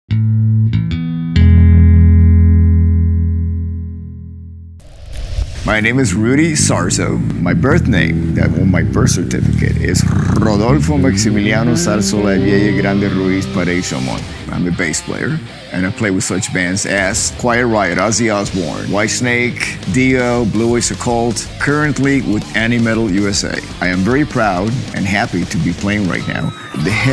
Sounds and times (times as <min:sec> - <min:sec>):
Bass guitar: 0:00.1 - 0:27.1
Speech: 0:05.7 - 0:27.1.